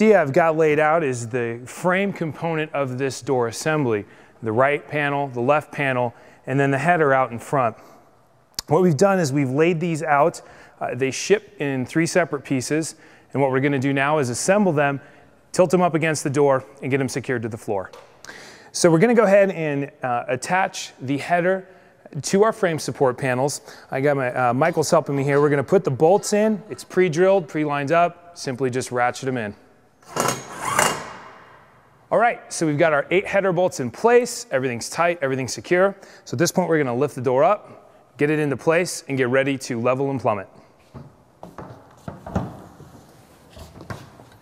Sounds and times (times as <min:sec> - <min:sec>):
Speech: 0:00.0 - 0:07.8, 0:08.6 - 0:18.0, 0:18.7 - 0:29.6, 0:32.1 - 0:37.6, 0:38.2 - 0:40.6.